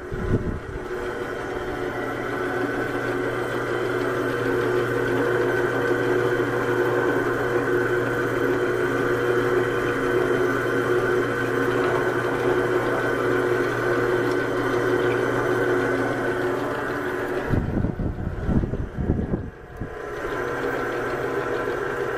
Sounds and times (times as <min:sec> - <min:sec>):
Drill: 0:00.8 - 0:17.6, 0:19.9 - 0:22.1.